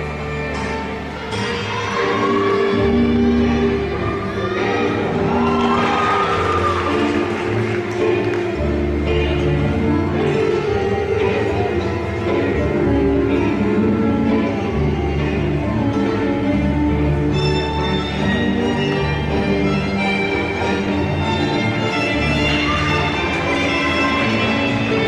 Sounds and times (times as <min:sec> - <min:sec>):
Music: 0:00.0 - 0:25.0.